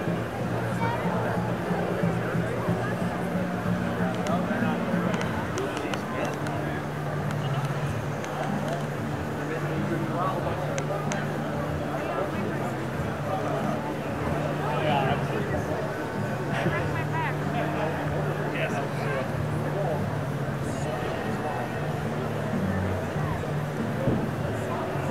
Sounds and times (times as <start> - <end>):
Speech: 0.0 - 25.1.